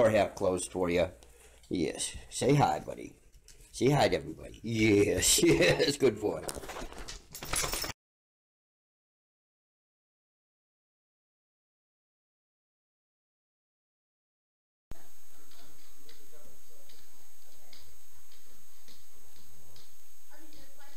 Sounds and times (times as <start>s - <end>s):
Speech: 0.0s - 3.2s, 3.8s - 6.5s, 14.9s - 19.3s, 20.3s - 20.9s.